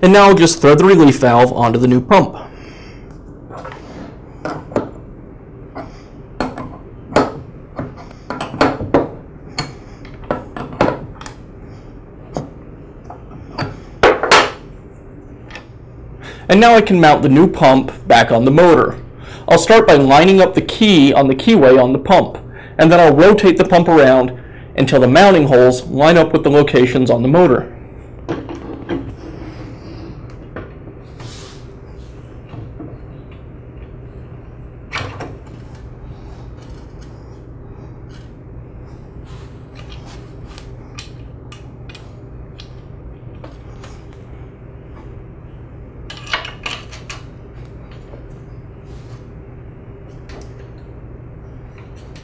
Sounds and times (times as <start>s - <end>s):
Speech: 0.0s - 2.5s, 16.5s - 27.7s.